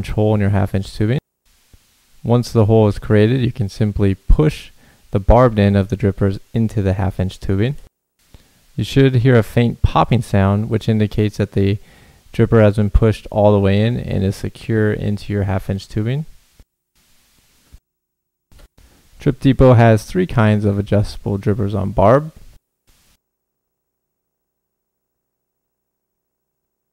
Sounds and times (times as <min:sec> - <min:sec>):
Speech: 0:00.0 - 0:01.2, 0:02.2 - 0:07.9, 0:08.8 - 0:16.4, 0:19.2 - 0:22.4.